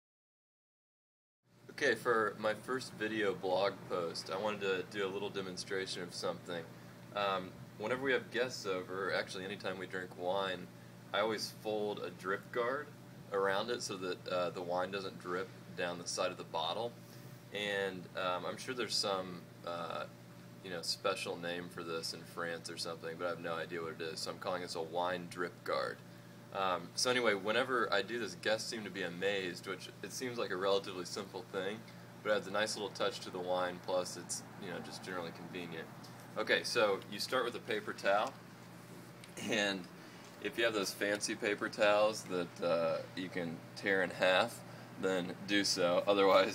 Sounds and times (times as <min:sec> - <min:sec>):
Speech: 0:01.7 - 0:17.0, 0:17.6 - 0:38.4, 0:39.4 - 0:46.5.